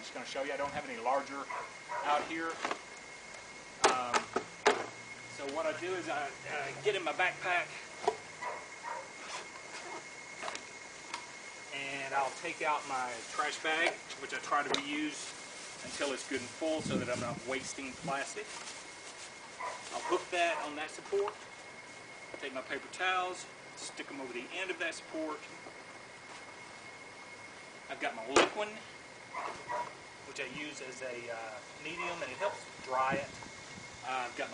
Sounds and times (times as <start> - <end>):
Speech: 0.0 - 2.6, 5.4 - 7.8, 11.7 - 18.5, 19.9 - 21.4, 22.4 - 25.5, 27.9 - 28.9, 30.3 - 33.3, 34.0 - 34.5.